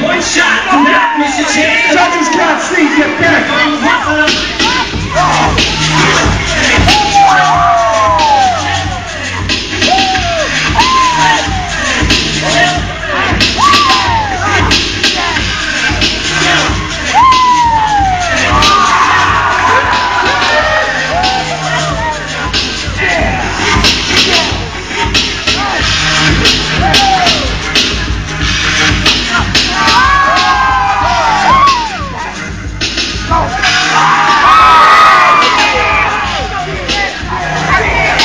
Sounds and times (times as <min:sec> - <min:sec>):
Music: 0:00.0 - 0:38.2.